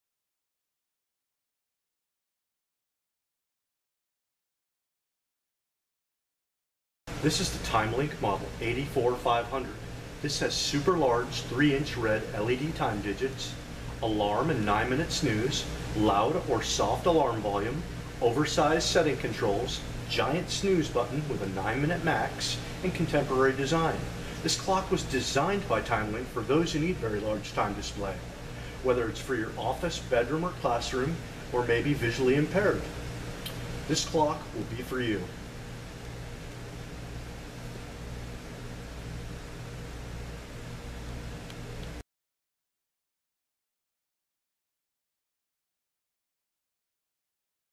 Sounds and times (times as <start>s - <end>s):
Speech: 7.2s - 32.9s, 33.9s - 35.4s.